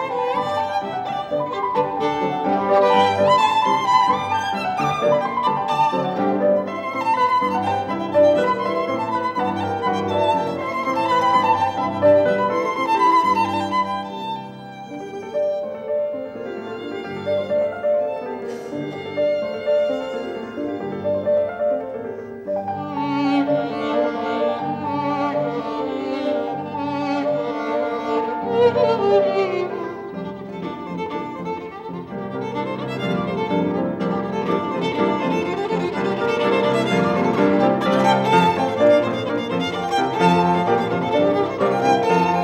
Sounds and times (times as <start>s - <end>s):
Classical music: 0.0s - 42.4s
Violin, fiddle: 0.0s - 42.4s.